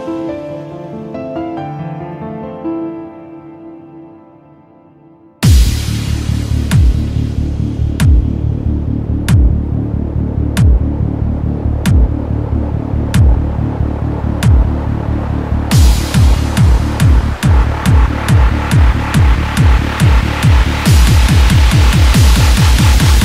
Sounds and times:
Music: 0:00.0 - 0:23.2.

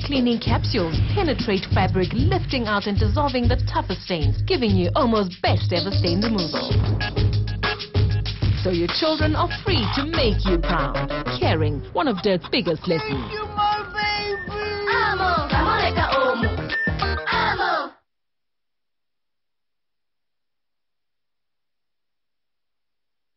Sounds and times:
Speech: 0:00.0 - 0:06.8, 0:08.6 - 0:13.9
Music: 0:00.0 - 0:18.0.

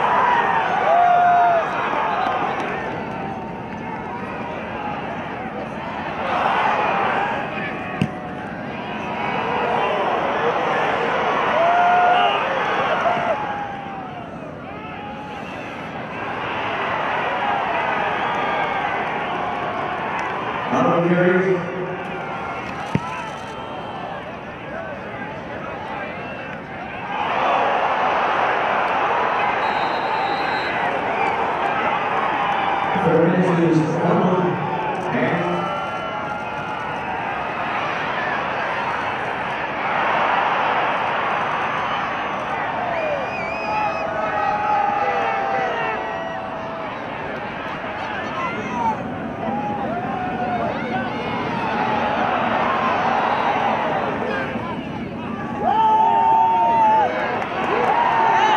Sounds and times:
Cheering: 0:00.0 - 0:58.5
Crowd: 0:00.0 - 0:58.5.

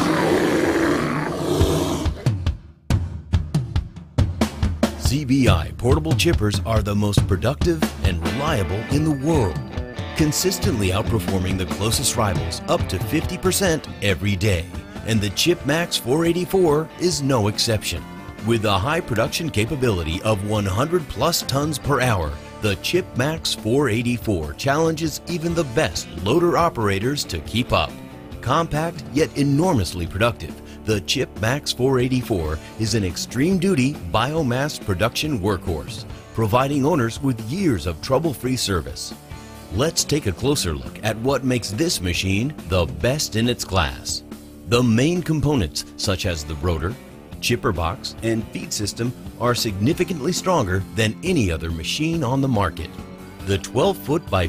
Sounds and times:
Music: 0:00.0 - 0:54.4
Speech: 0:05.0 - 0:09.6, 0:10.2 - 0:54.4.

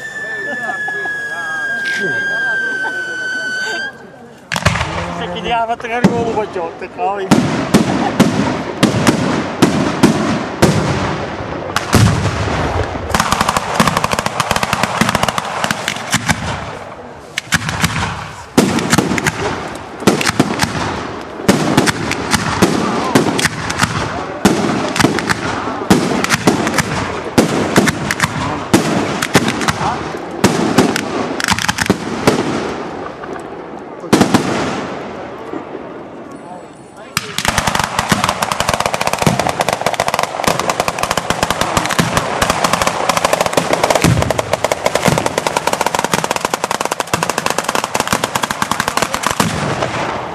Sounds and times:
Firecracker: 0:00.0 - 0:50.3.

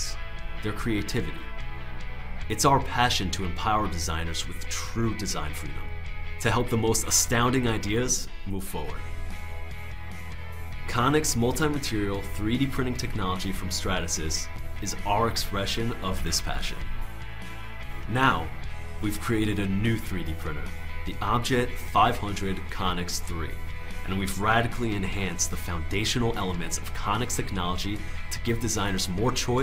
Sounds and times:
Speech: 0:00.0 - 0:01.5, 0:02.5 - 0:09.1, 0:10.9 - 0:16.9, 0:18.1 - 0:29.6
Music: 0:00.0 - 0:29.6.

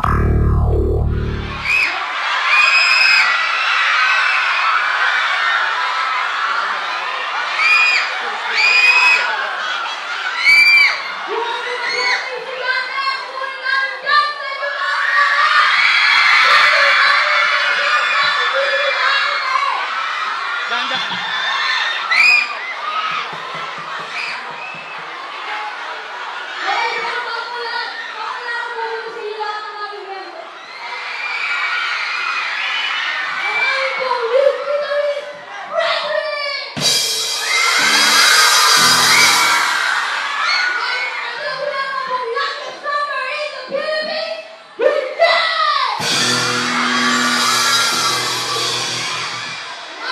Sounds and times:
Inside, large room or hall: 0:00.0 - 0:50.1.

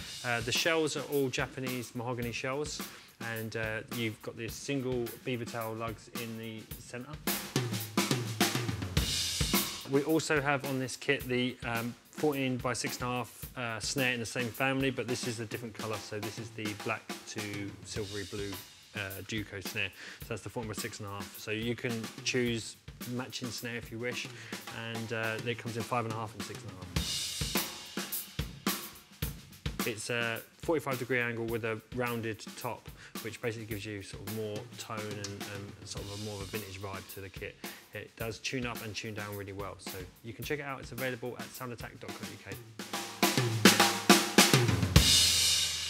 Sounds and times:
Bass drum: 0:00.0 - 0:01.6, 0:03.4 - 0:45.9
Cymbal: 0:00.0 - 0:45.9
Drum kit: 0:00.0 - 0:45.9
Snare drum: 0:00.0 - 0:45.9.

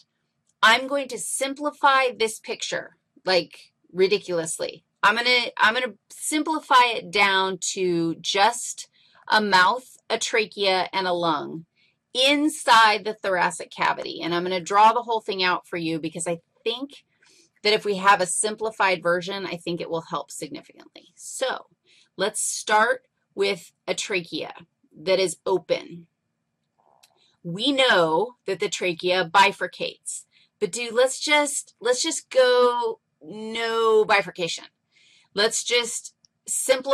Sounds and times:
Speech: 0:00.6 - 0:11.6, 0:12.2 - 0:17.0, 0:17.7 - 0:21.6, 0:22.2 - 0:26.0, 0:27.5 - 0:34.7, 0:35.4 - 0:36.9.

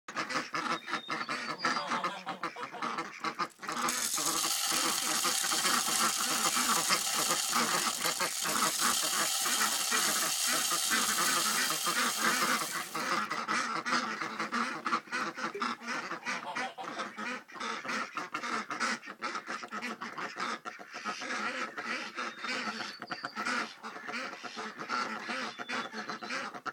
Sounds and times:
Goose: 0:00.1 - 0:03.9, 0:08.3 - 0:26.7.

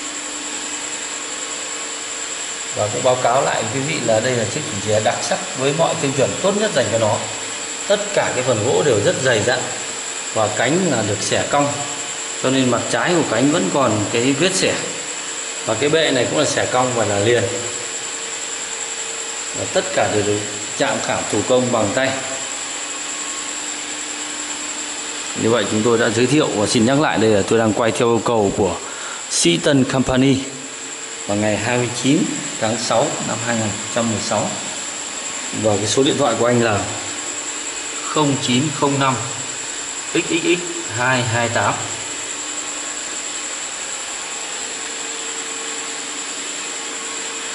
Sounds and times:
Vacuum cleaner: 0:00.0 - 0:47.5
Speech: 0:02.7 - 0:15.1, 0:15.7 - 0:17.8, 0:19.6 - 0:22.5, 0:25.4 - 0:30.7, 0:31.3 - 0:34.8, 0:35.5 - 0:37.1, 0:38.0 - 0:39.5, 0:40.1 - 0:42.1.

